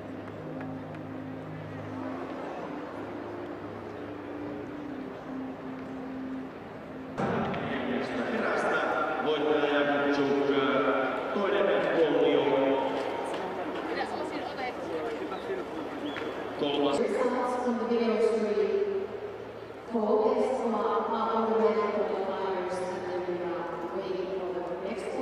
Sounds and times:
Outside, urban or manmade: 0.0 - 25.2.

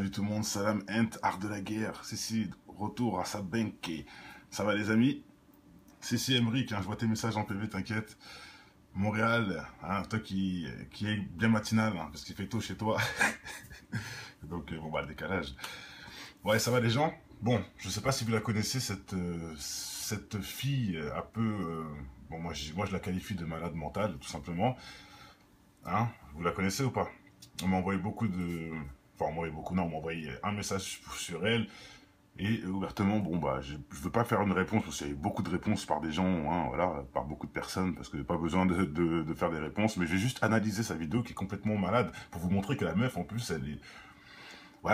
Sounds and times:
Speech: 0.0 - 5.3, 6.0 - 8.2, 8.9 - 13.7, 14.4 - 15.7, 16.4 - 24.8, 25.8 - 31.8, 32.4 - 43.9.

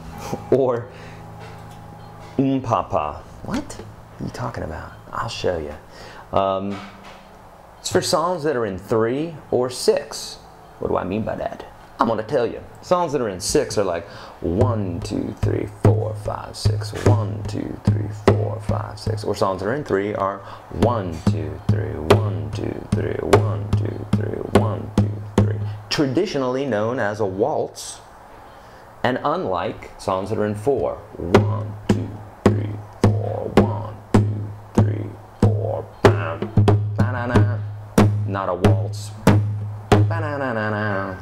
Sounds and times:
Speech: 0.4 - 1.0, 2.3 - 7.0, 7.8 - 28.1, 29.0 - 34.0, 34.8 - 37.7, 38.3 - 39.3, 40.1 - 41.2.

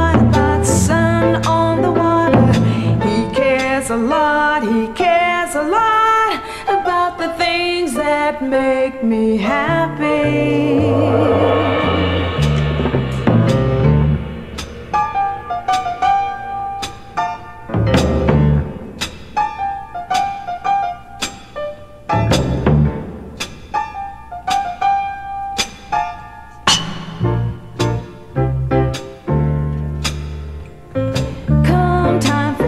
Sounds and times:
Music: 0.0 - 32.6.

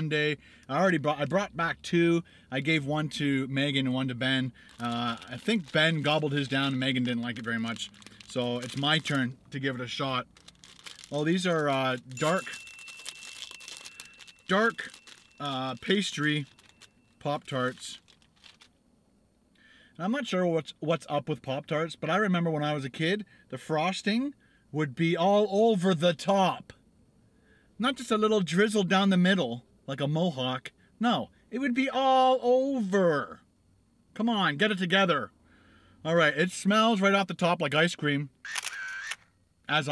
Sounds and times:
Speech: 0.0 - 10.3, 11.1 - 12.6, 14.5 - 16.5, 17.2 - 18.0, 20.0 - 26.8, 27.8 - 33.4, 34.2 - 35.3, 36.1 - 38.3, 39.7 - 39.9.

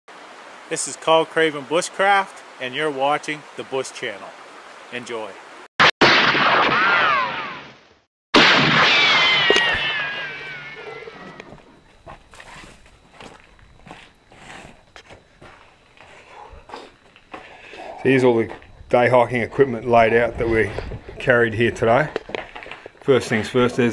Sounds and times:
Stream: 0.1 - 5.7.

